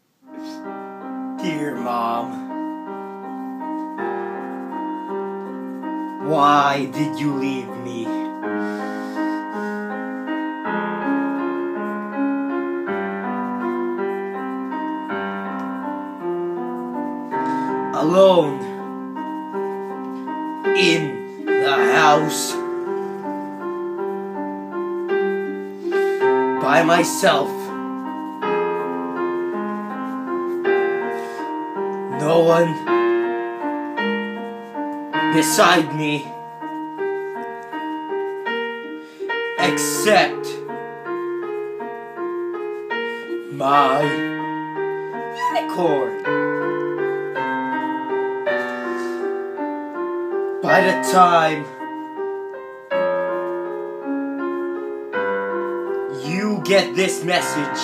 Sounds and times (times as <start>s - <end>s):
Music: 0.0s - 57.8s
Speech: 1.4s - 2.4s, 6.2s - 8.3s, 18.0s - 18.7s, 20.8s - 22.6s, 26.6s - 27.7s, 32.2s - 32.8s, 35.3s - 36.3s, 39.6s - 40.6s, 43.5s - 44.2s, 45.4s - 46.2s, 50.6s - 51.7s, 56.2s - 57.8s.